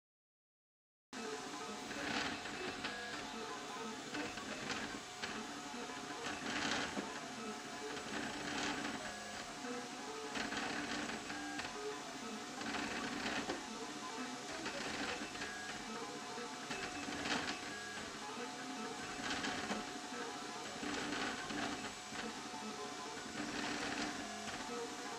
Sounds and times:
Printer: 1.2 - 25.1.

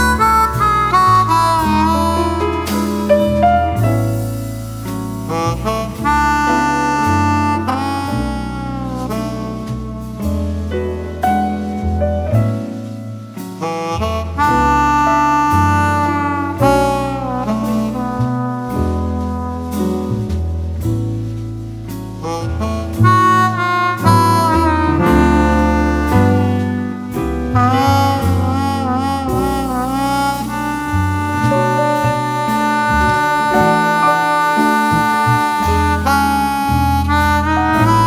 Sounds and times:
Saxophone: 0.0 - 20.4, 22.2 - 38.0.

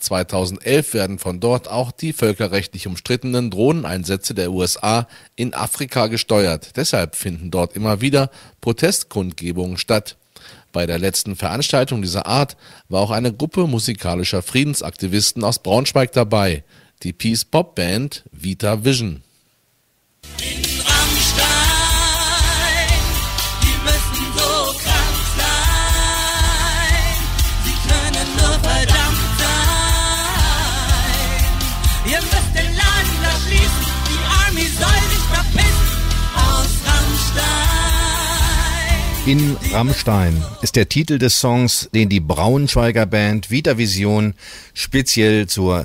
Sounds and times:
Speech: 0.0 - 10.2, 10.8 - 19.2, 39.3 - 45.8.

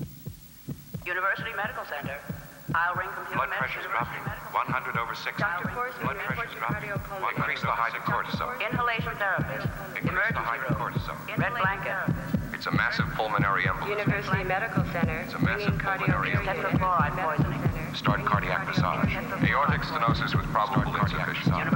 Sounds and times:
Heart sounds, heartbeat: 0.0 - 21.7
Hum: 0.0 - 21.7
Throbbing: 0.8 - 21.7.

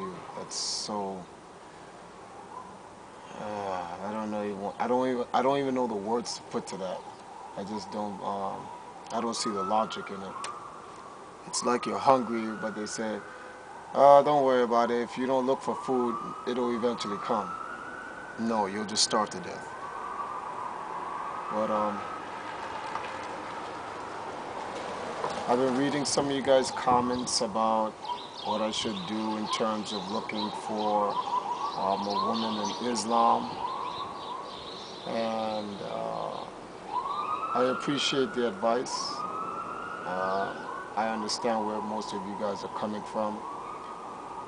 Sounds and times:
Chirp, tweet: 26.6 - 27.4, 28.0 - 37.3.

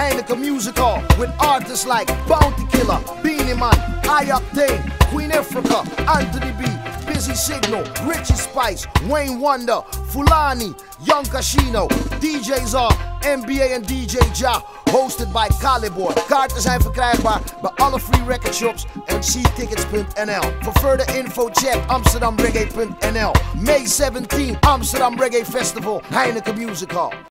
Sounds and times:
Jazz: 0.0 - 9.4, 10.0 - 26.0.

